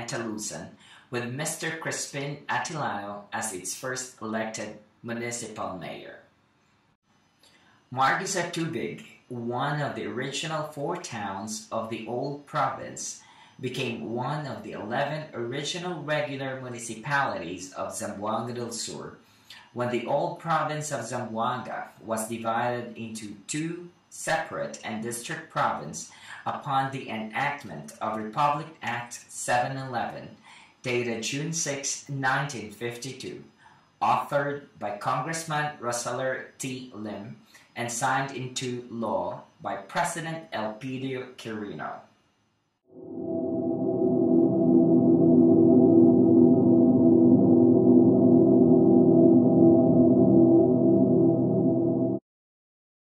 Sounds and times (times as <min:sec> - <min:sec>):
Ambient music: 0:42.9 - 0:52.2.